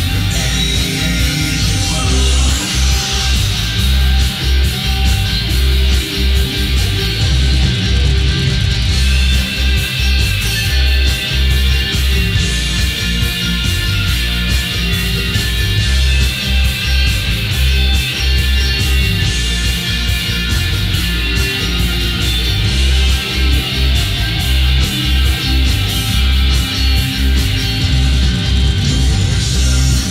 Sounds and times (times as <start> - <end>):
Music: 0.0 - 30.1.